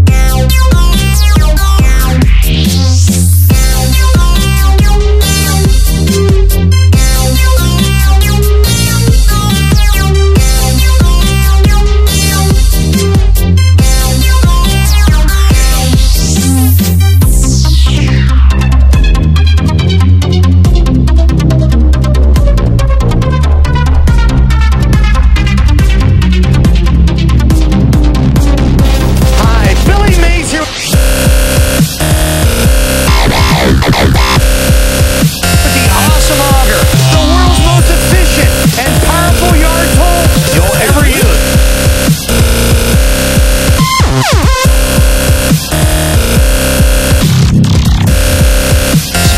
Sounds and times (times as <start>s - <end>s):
Dubstep: 0.0s - 21.6s, 22.2s - 49.3s.